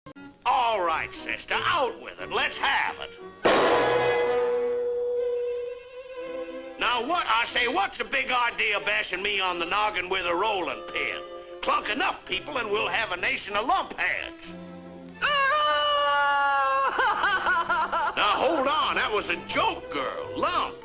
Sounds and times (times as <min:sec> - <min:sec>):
Speech: 0:00.5 - 0:03.2, 0:06.8 - 0:14.6, 0:18.2 - 0:20.8
Violin, fiddle: 0:05.3 - 0:06.8, 0:09.8 - 0:13.2.